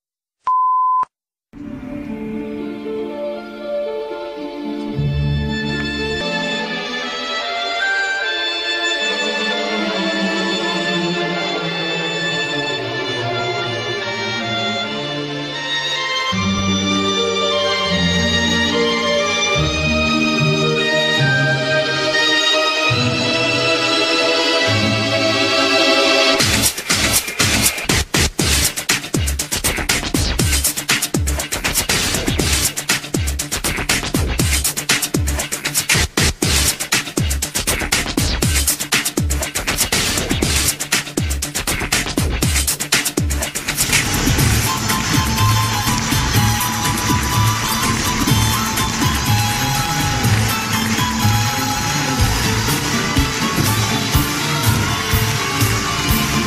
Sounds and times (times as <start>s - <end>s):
Soundtrack music: 1.6s - 56.4s.